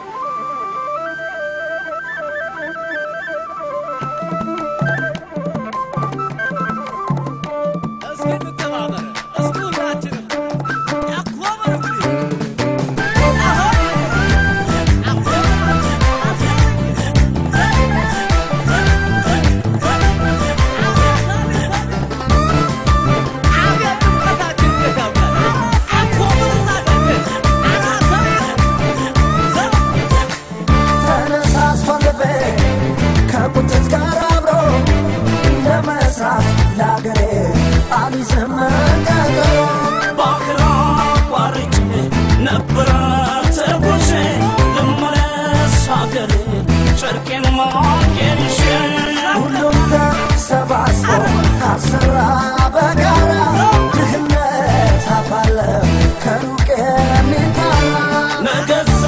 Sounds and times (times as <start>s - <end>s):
Music of Africa: 0.0s - 59.0s.